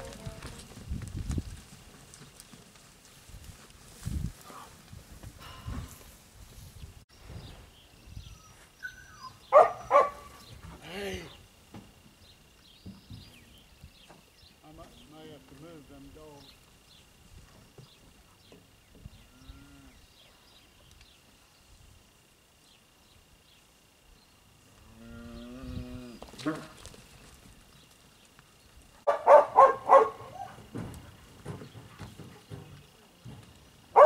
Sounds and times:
Speech: 14.6s - 16.6s.

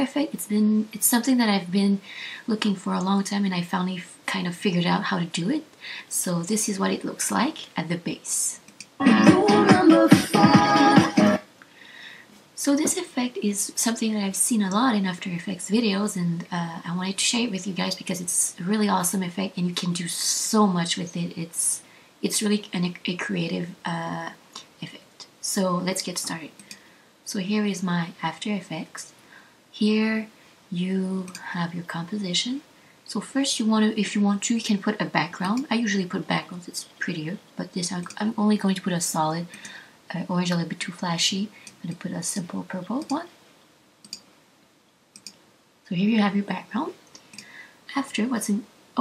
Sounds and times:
Speech: 0.0s - 8.7s, 12.6s - 26.6s, 27.3s - 29.2s, 29.8s - 43.4s, 45.9s - 47.0s, 47.9s - 49.0s.

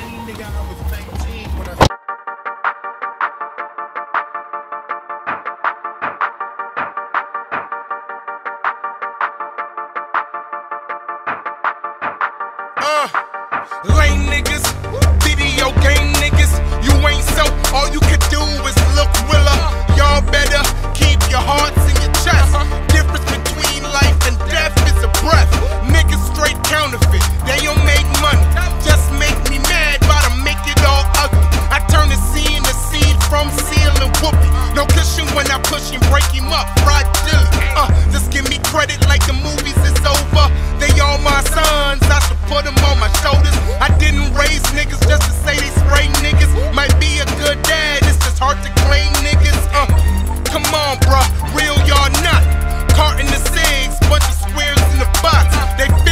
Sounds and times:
Music: 0.0s - 56.1s.

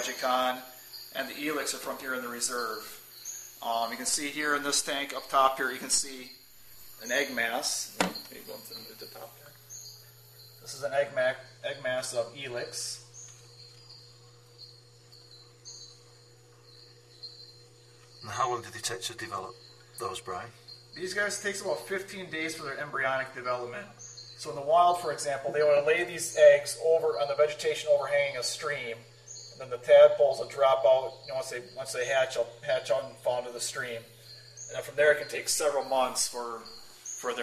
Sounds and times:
Speech: 0.0s - 0.6s, 1.2s - 2.9s, 3.6s - 6.3s, 7.0s - 9.4s, 10.7s - 13.0s, 18.2s - 29.0s, 29.6s - 34.1s, 34.7s - 37.4s.

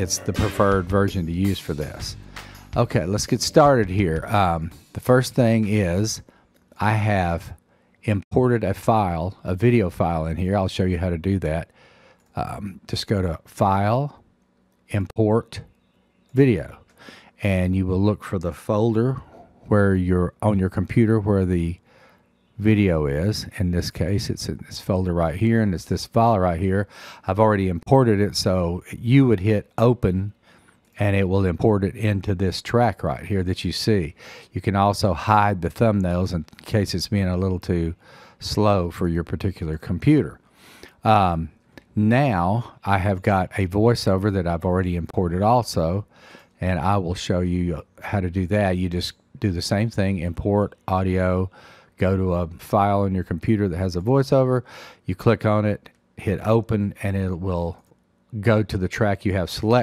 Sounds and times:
Speech: 0.0s - 6.2s, 6.8s - 11.7s, 12.4s - 14.2s, 14.9s - 15.7s, 16.3s - 21.8s, 22.6s - 30.4s, 31.0s - 40.4s, 41.0s - 59.8s.

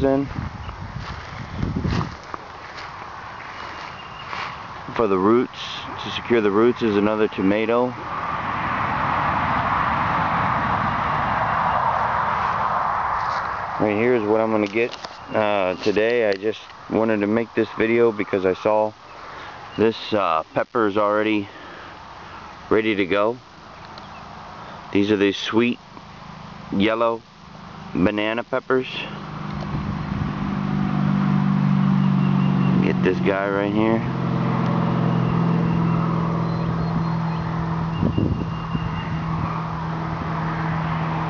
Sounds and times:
Speech: 0.0s - 0.3s, 4.9s - 8.0s, 13.8s - 19.0s, 19.8s - 21.5s, 22.7s - 23.4s, 24.9s - 25.8s, 26.7s - 27.2s, 28.0s - 29.2s, 32.8s - 34.1s.

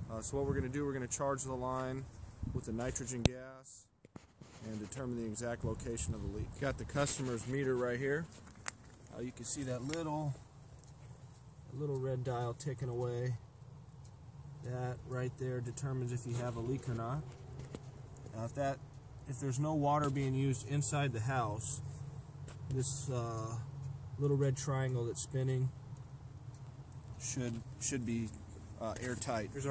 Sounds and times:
Speech: 0.1s - 3.9s, 4.6s - 8.3s, 9.1s - 10.4s, 11.7s - 13.4s, 14.6s - 17.3s, 18.3s - 21.8s, 22.7s - 25.8s, 27.2s - 29.7s.

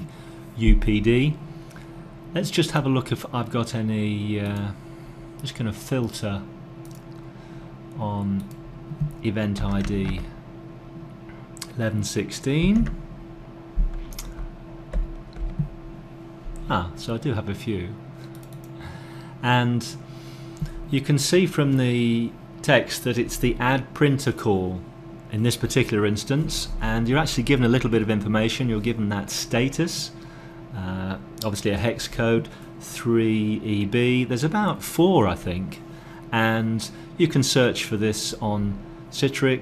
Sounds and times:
Speech: 0.0s - 1.4s, 2.3s - 4.8s, 5.4s - 6.5s, 8.0s - 8.5s, 9.2s - 10.4s, 11.6s - 13.0s, 16.6s - 18.0s, 19.4s - 20.0s, 20.9s - 39.6s.

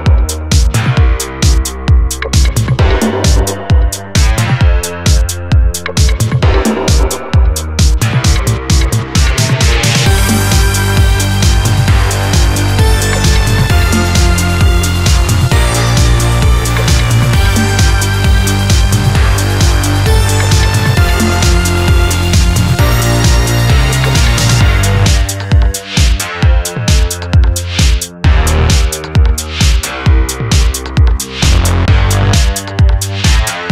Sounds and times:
Music: 0.0s - 33.7s.

